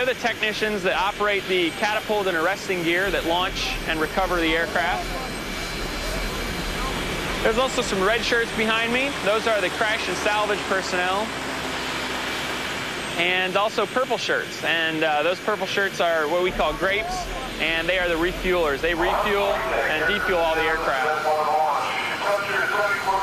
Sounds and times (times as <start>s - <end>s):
Speech: 0.0s - 5.4s, 6.0s - 11.3s, 13.2s - 23.2s
Aircraft: 0.0s - 23.2s
Outside, rural or natural: 0.0s - 23.2s.